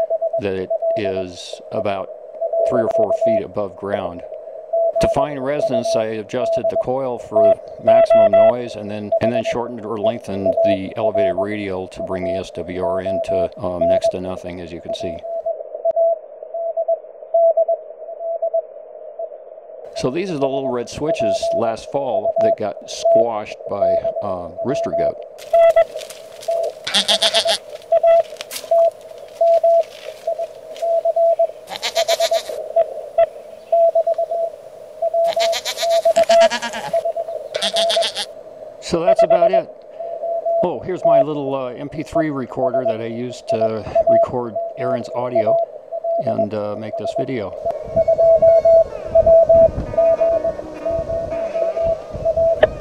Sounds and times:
Speech: 0.4s - 4.3s, 5.0s - 15.2s, 20.0s - 25.2s, 38.8s - 39.7s, 40.6s - 45.6s, 46.2s - 47.6s
Goat: 25.4s - 27.6s, 31.7s - 32.6s, 35.2s - 37.0s, 37.6s - 38.3s.

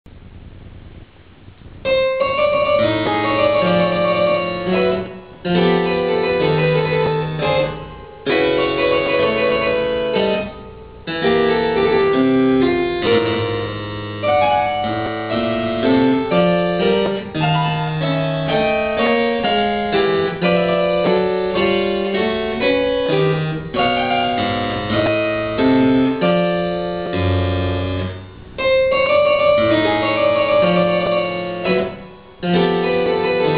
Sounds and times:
Harpsichord: 1.9s - 33.5s.

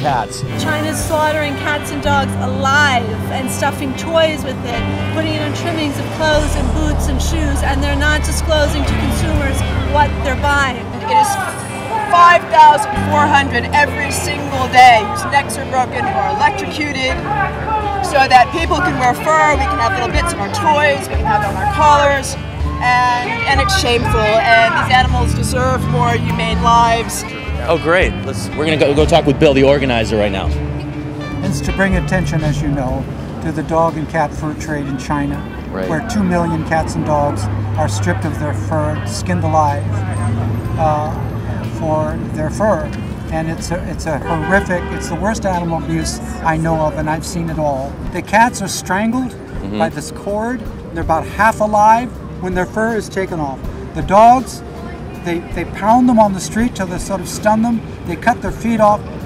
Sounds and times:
Music: 0.0s - 59.2s.

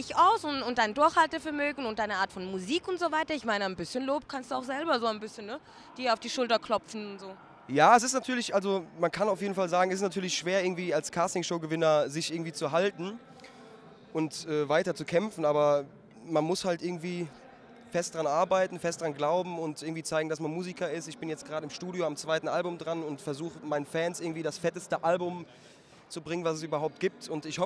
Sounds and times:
Speech: 14.1s - 25.5s.

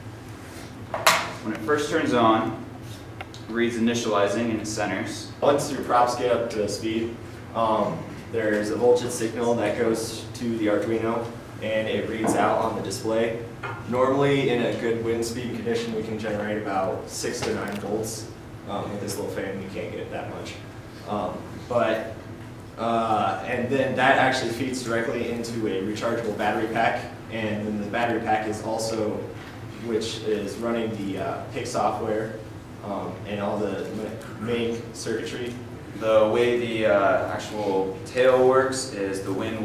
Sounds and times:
Speech: 1.4s - 2.7s, 3.4s - 22.2s, 22.8s - 39.6s.

